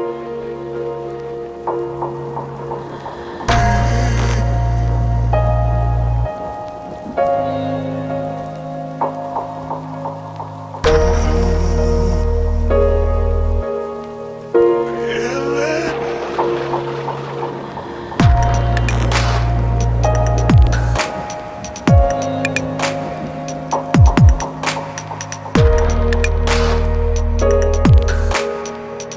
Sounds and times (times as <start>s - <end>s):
Music: 0.0s - 29.1s.